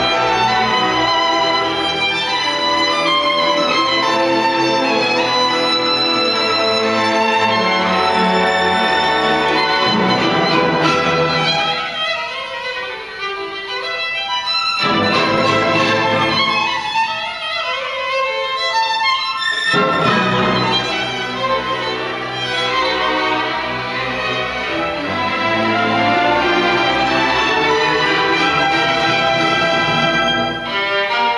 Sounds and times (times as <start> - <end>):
Violin, fiddle: 0.0 - 31.3.